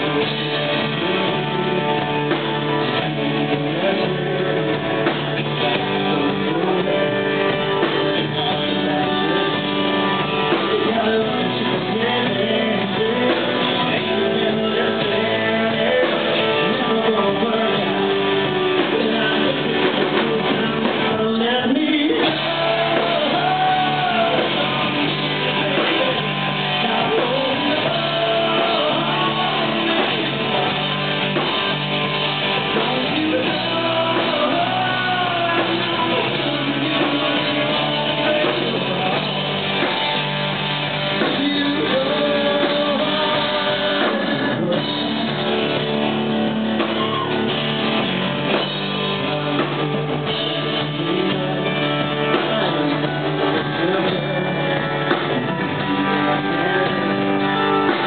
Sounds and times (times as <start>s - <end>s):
Music: 0.0s - 58.0s
Male singing: 2.9s - 30.8s, 32.6s - 39.9s, 41.2s - 45.8s, 49.2s - 58.0s.